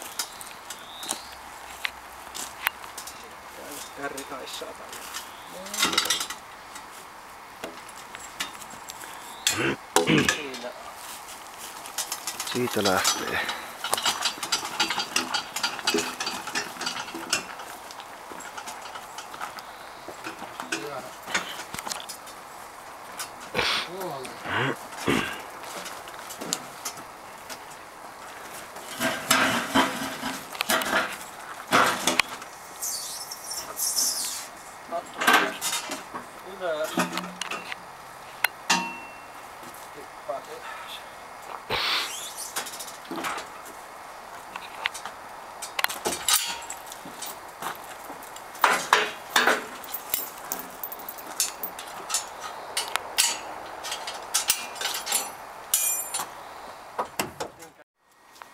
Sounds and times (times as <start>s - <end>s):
Speech: 3.2s - 4.9s, 10.1s - 10.9s, 12.5s - 13.5s, 20.6s - 21.1s, 23.9s - 24.4s, 36.4s - 37.0s, 40.0s - 41.1s, 57.6s - 57.8s.